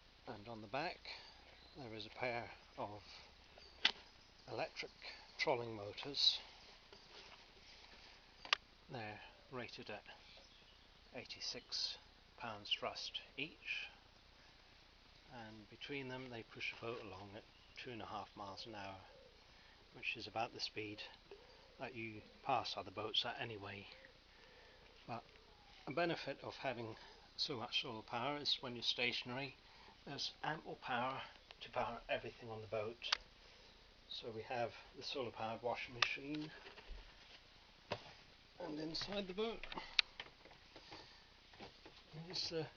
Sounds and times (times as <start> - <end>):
Speech: 0.3 - 3.2, 4.5 - 6.5, 8.9 - 10.2, 11.1 - 14.0, 15.3 - 19.1, 19.9 - 21.2, 21.8 - 24.1, 25.9 - 33.2, 34.1 - 36.6, 38.6 - 39.8, 42.1 - 42.7.